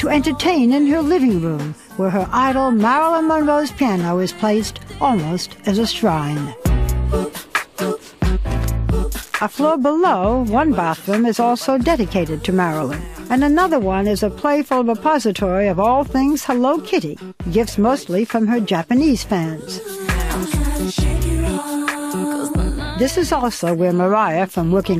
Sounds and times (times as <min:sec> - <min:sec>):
Speech: 0:00.0 - 0:06.6, 0:09.4 - 0:19.8, 0:22.8 - 0:25.0
Music: 0:00.0 - 0:25.0.